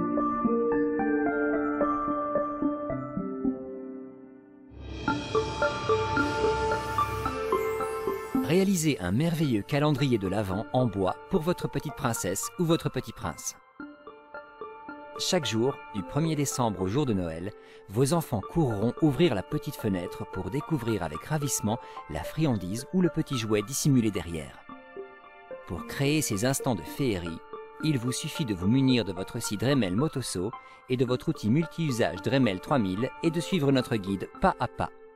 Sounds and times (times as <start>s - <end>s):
Music: 0.0s - 35.1s
Speech: 8.4s - 13.6s, 15.2s - 24.6s, 25.6s - 35.0s.